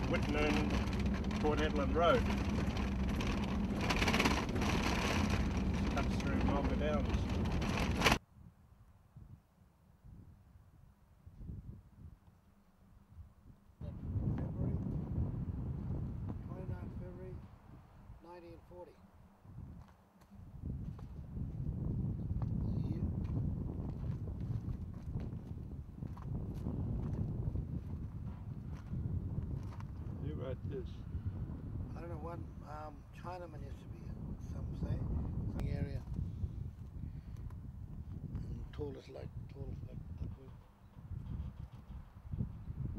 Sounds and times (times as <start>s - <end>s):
Speech: 0.0s - 0.7s, 1.4s - 2.2s, 5.9s - 7.2s, 16.5s - 17.4s, 18.2s - 19.0s, 22.6s - 23.1s, 30.2s - 31.0s, 31.9s - 36.1s, 38.4s - 40.6s.